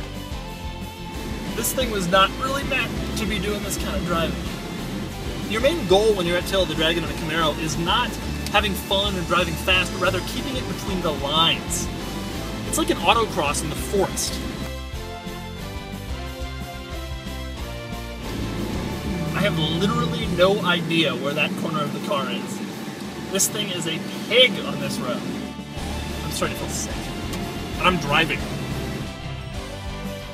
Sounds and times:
Music: 0.0 - 30.3
Speech: 1.6 - 4.4, 5.5 - 11.9, 12.7 - 14.4, 19.3 - 22.6, 23.3 - 25.2, 26.2 - 27.0, 27.8 - 28.4.

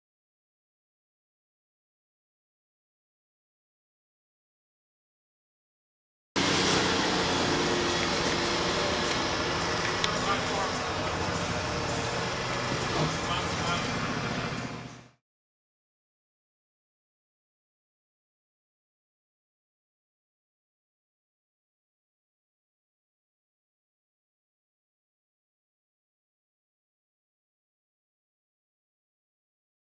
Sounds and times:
Outside, urban or manmade: 6.4 - 15.2
Vehicle: 6.4 - 15.2
Speech: 8.7 - 11.8, 12.9 - 14.6.

